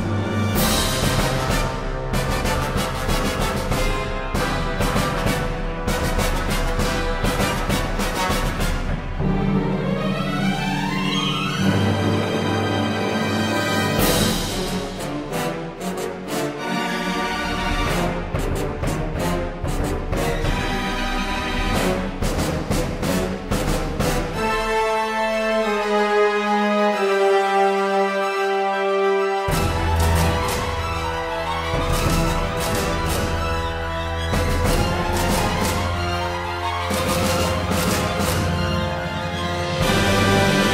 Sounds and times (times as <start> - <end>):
Soundtrack music: 0.0 - 40.7.